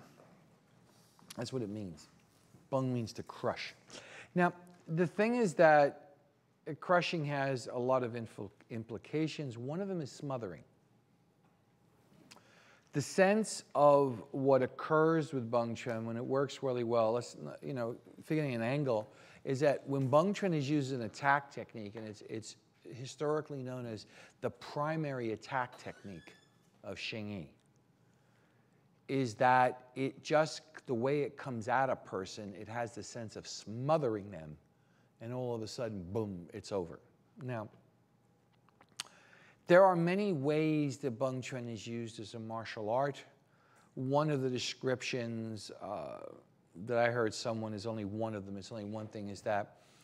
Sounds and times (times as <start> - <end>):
Speech: 1.3 - 10.7, 12.9 - 27.6, 29.1 - 34.6, 35.2 - 37.8, 39.7 - 43.4, 44.0 - 49.8.